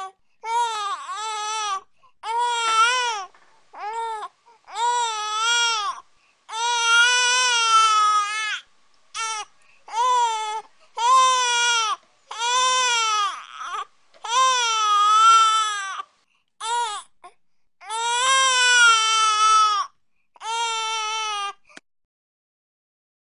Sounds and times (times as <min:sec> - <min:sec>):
Baby cry, infant cry: 0:00.0 - 0:08.6, 0:09.2 - 0:21.6.